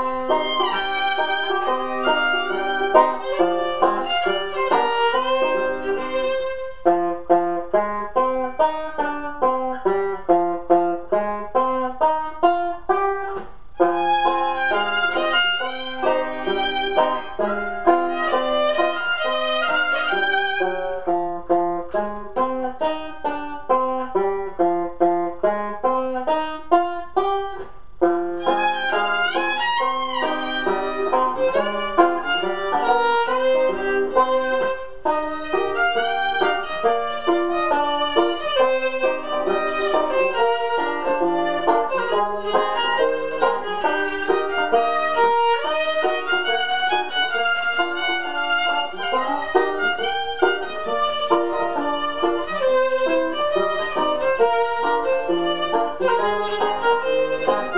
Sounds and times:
Banjo: 0:00.0 - 0:57.7
Bluegrass: 0:00.0 - 0:57.7
Classical music: 0:00.0 - 0:57.7
Violin, fiddle: 0:00.0 - 0:57.7.

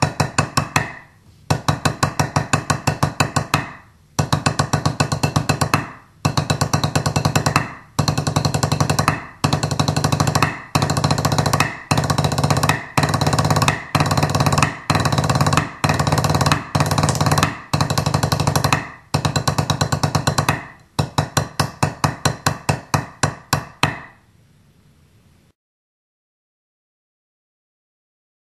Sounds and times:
Drum: 0:00.0 - 0:23.1.

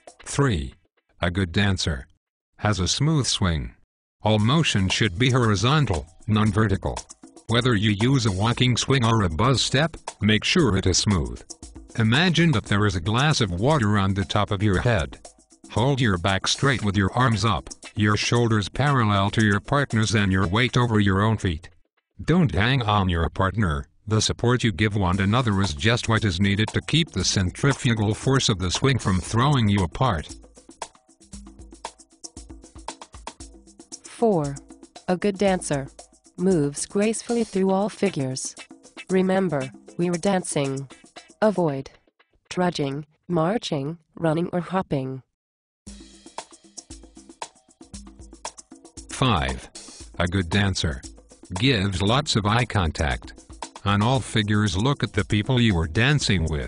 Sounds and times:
Music: 0:00.0 - 0:00.9, 0:04.2 - 0:42.4, 0:45.9 - 0:56.6
Speech synthesizer: 0:00.3 - 0:11.4, 0:12.0 - 0:30.3, 0:34.1 - 0:41.9, 0:42.5 - 0:45.3, 0:49.2 - 0:53.3, 0:53.9 - 0:56.6.

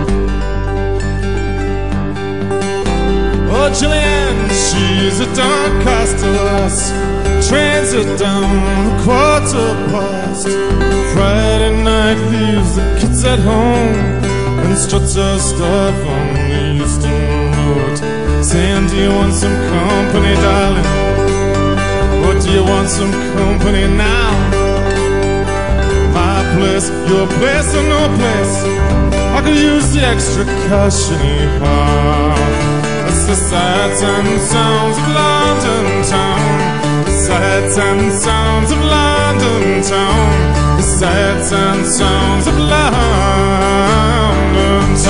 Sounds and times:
Music: 0:00.0 - 0:45.1.

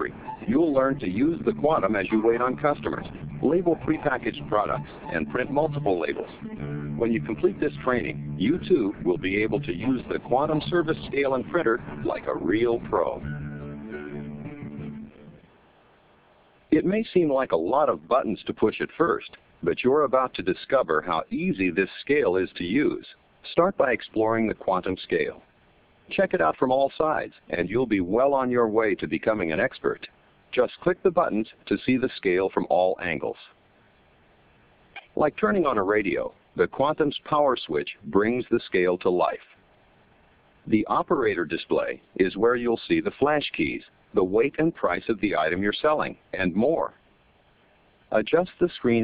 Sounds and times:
Speech: 0:00.0 - 0:06.4, 0:07.0 - 0:13.2, 0:16.7 - 0:25.5, 0:26.1 - 0:33.6, 0:35.0 - 0:39.6, 0:40.7 - 0:47.0, 0:48.1 - 0:49.0
Music: 0:00.0 - 0:15.5.

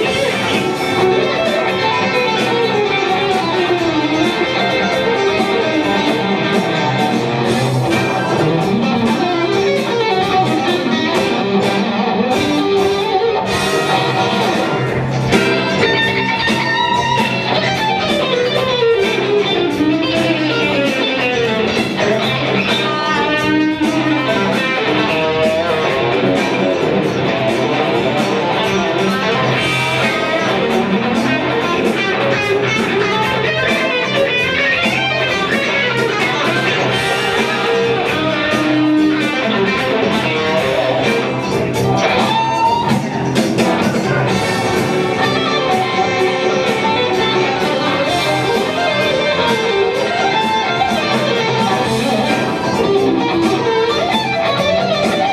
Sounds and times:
Electric guitar: 0:00.0 - 0:55.3.

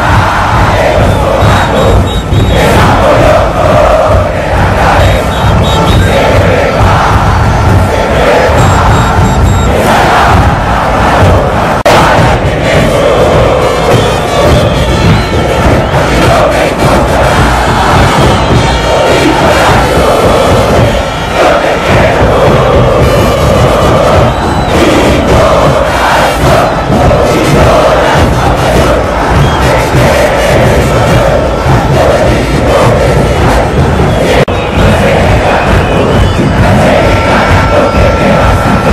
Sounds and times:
Music: 0:00.0 - 0:38.9.

